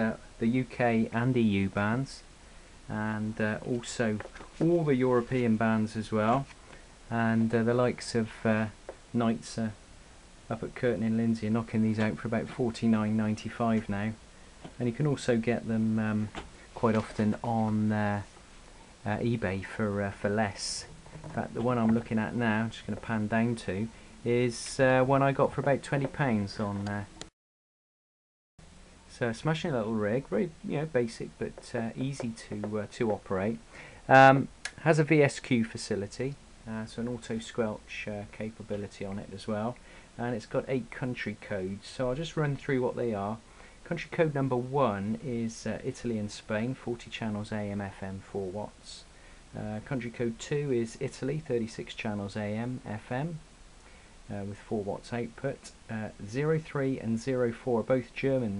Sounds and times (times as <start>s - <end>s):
Speech: 0.0s - 2.3s, 2.9s - 9.8s, 10.5s - 14.2s, 14.8s - 18.3s, 19.0s - 27.3s, 29.1s - 53.5s, 54.3s - 58.5s.